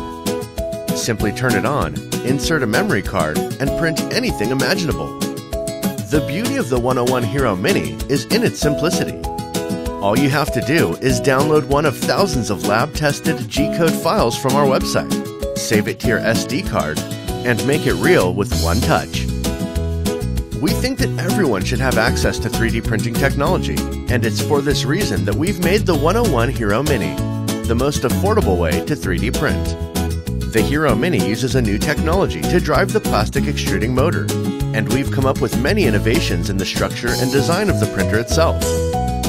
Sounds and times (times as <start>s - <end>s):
Music: 0.0s - 39.2s
Speech: 1.0s - 5.1s, 6.1s - 9.2s, 10.0s - 19.2s, 20.6s - 29.8s, 30.5s - 38.8s.